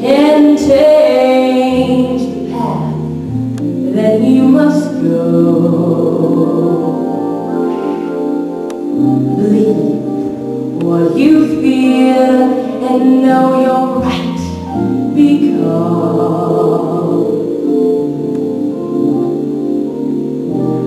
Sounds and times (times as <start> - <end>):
Female singing: 0.0 - 3.0, 3.9 - 7.1, 10.8 - 14.6, 15.2 - 17.4
Music: 0.0 - 20.8.